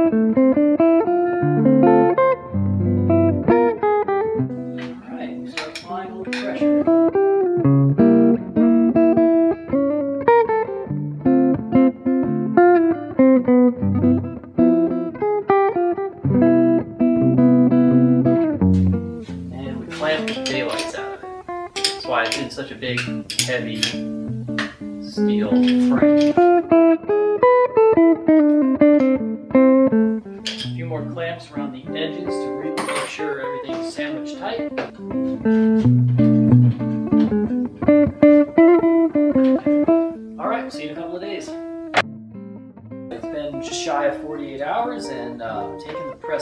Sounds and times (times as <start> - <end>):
Electronic tuner: 0.0 - 46.4
Guitar: 0.0 - 46.4
Speech: 4.9 - 6.8, 19.5 - 21.2, 22.0 - 24.0, 25.0 - 26.4, 30.7 - 35.0, 40.4 - 41.6, 43.1 - 46.4.